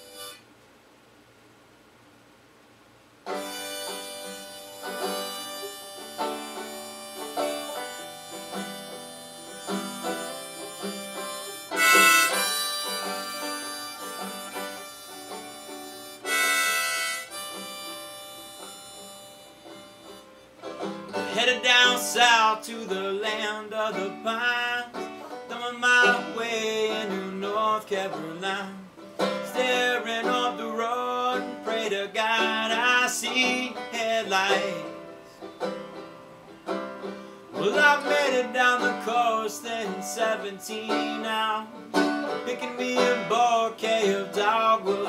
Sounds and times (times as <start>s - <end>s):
Harmonica: 0.0s - 0.4s, 3.3s - 22.4s
Wind instrument, woodwind instrument: 3.4s - 20.5s.